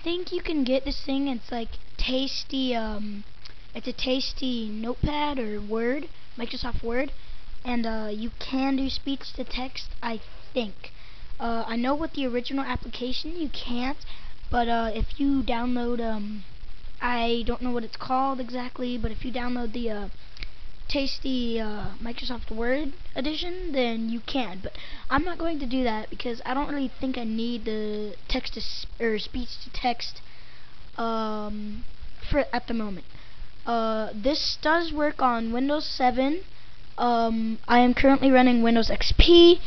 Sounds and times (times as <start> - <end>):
Child speech, kid speaking: 0.0 - 20.2, 20.9 - 30.2, 31.0 - 33.0, 33.7 - 39.6
Narration, monologue: 0.0 - 39.6.